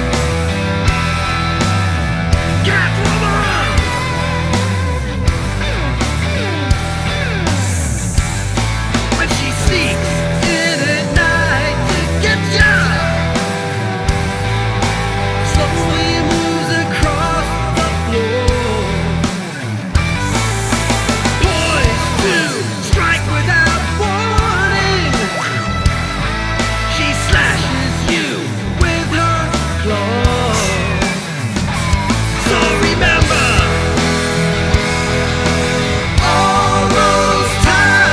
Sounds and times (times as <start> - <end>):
Music: 0.0 - 38.1.